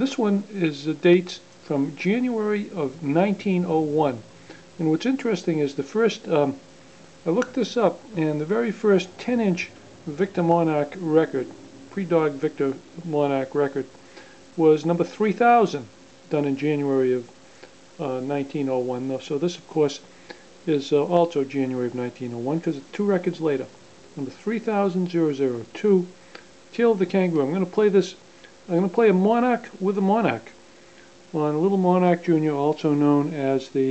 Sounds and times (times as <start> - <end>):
Speech: 0.0 - 6.6, 7.2 - 13.9, 14.6 - 17.3, 18.0 - 30.6, 31.3 - 33.9.